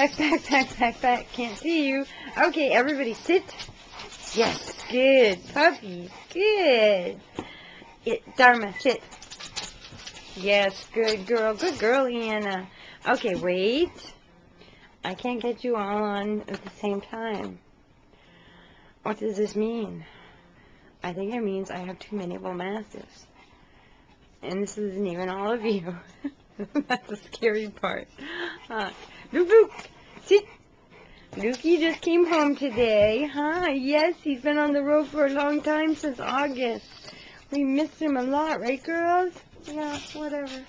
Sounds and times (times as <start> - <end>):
Speech: 0.0 - 3.6, 4.3 - 7.2, 8.1 - 9.0, 10.4 - 14.1, 15.1 - 17.6, 19.1 - 20.0, 21.0 - 23.1, 24.4 - 26.1, 28.7 - 30.5, 31.4 - 36.9, 37.5 - 40.6.